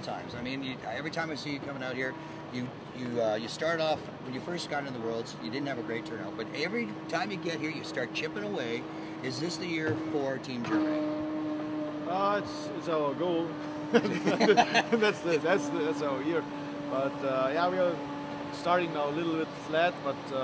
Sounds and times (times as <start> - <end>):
Speech: 0.0 - 11.0, 15.0 - 18.0, 18.6 - 20.4.